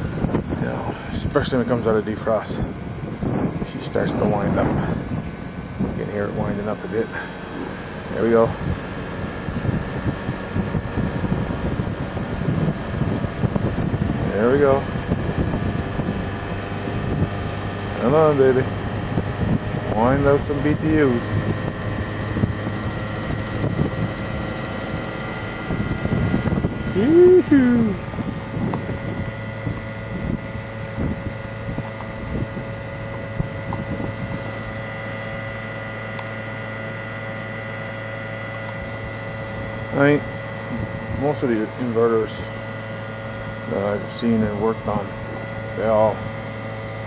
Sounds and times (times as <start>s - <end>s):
Speech: 0.6s - 2.7s, 3.6s - 4.9s, 6.0s - 7.3s, 8.1s - 8.6s, 14.2s - 14.9s, 18.0s - 18.7s, 19.9s - 21.3s, 27.0s - 28.0s, 39.9s - 40.2s, 41.2s - 42.5s, 43.7s - 45.1s, 45.8s - 46.2s.